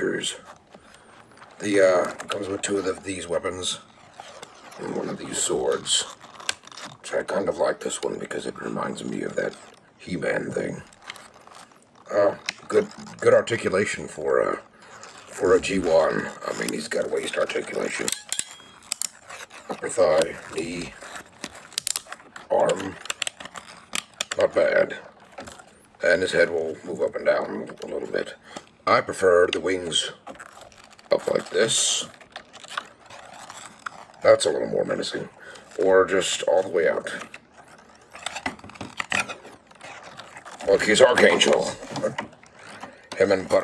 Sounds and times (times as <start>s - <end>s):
Speech: 0.0s - 0.5s, 1.6s - 3.9s, 4.8s - 6.2s, 7.0s - 11.0s, 12.1s - 14.7s, 15.3s - 18.2s, 19.7s - 21.0s, 22.5s - 23.1s, 24.4s - 25.1s, 26.0s - 30.3s, 31.1s - 32.2s, 34.2s - 37.4s, 40.6s - 42.2s, 43.2s - 43.6s.